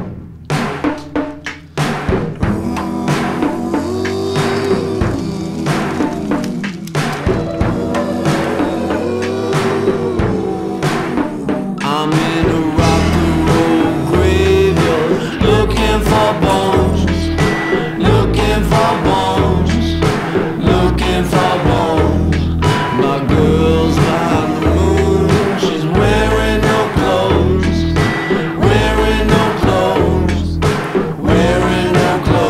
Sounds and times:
Music: 0:00.0 - 0:32.4.

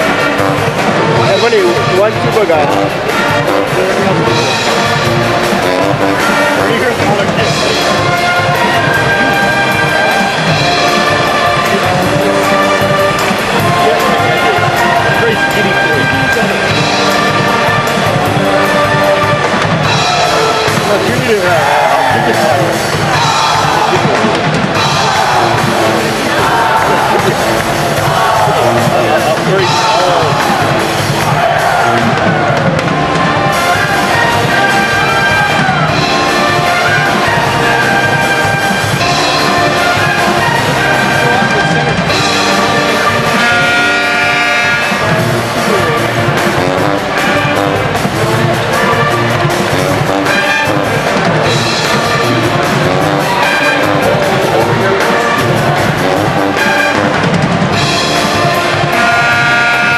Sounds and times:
Music: 0:00.0 - 0:59.9
Speech: 0:01.2 - 0:04.7, 0:06.4 - 0:07.8, 0:13.6 - 0:16.9, 0:20.7 - 0:22.9, 0:28.2 - 0:30.7, 0:40.4 - 0:42.4, 0:45.5 - 0:46.3.

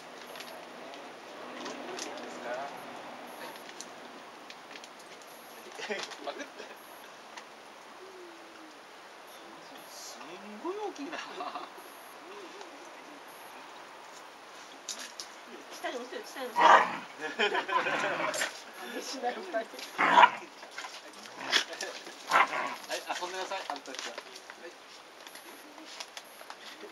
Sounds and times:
Bark: 0:16.6 - 0:17.0, 0:20.0 - 0:20.4, 0:22.3 - 0:22.8
Canidae, dogs, wolves: 0:16.6 - 0:18.6, 0:19.9 - 0:23.0.

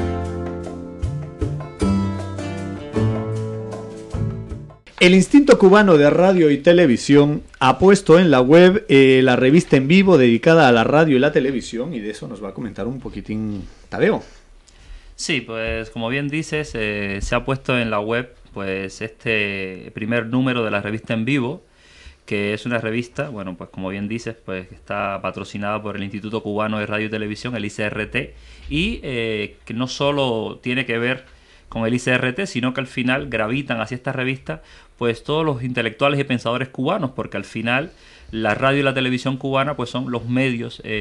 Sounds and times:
Speech: 0:05.0 - 0:14.4, 0:15.2 - 0:21.6, 0:22.3 - 0:41.0.

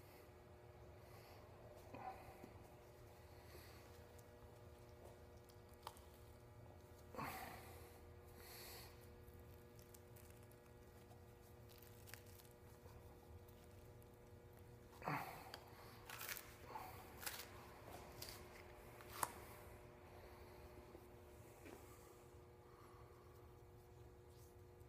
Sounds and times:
Tearing: 0:11.4 - 0:13.9, 0:16.0 - 0:16.6, 0:17.2 - 0:17.6.

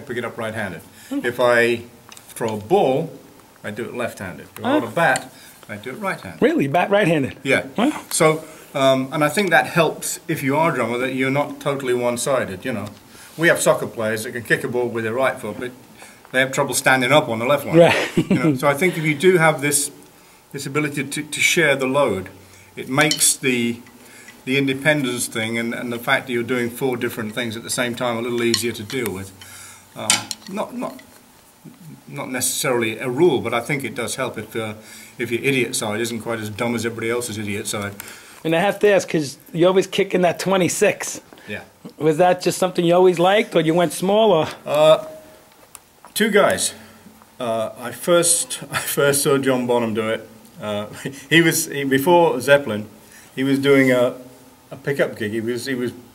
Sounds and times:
Speech: 0:00.0 - 0:20.0, 0:20.6 - 0:23.8, 0:24.5 - 0:29.4, 0:30.0 - 0:31.0, 0:31.7 - 0:45.1, 0:46.2 - 0:46.8, 0:47.4 - 0:56.0.

